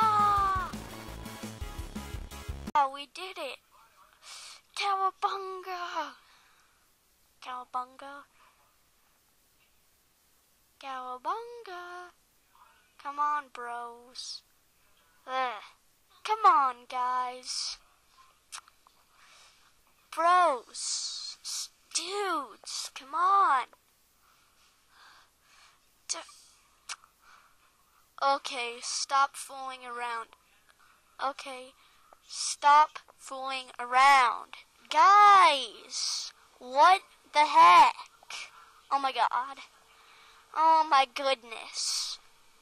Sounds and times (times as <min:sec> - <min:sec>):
Inside, small room: 0:00.0 - 0:42.6
Speech: 0:02.8 - 0:06.2, 0:07.4 - 0:08.8, 0:10.8 - 0:18.7, 0:20.0 - 0:23.8, 0:26.1 - 0:27.0, 0:27.7 - 0:42.2.